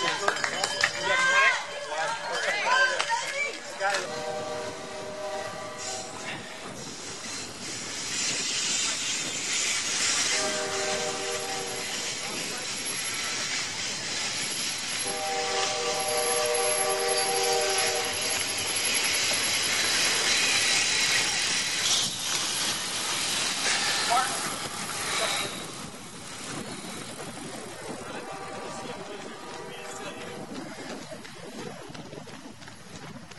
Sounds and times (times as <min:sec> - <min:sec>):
Run: 0:00.0 - 0:05.6, 0:17.7 - 0:33.3
Outside, urban or manmade: 0:00.0 - 0:33.3.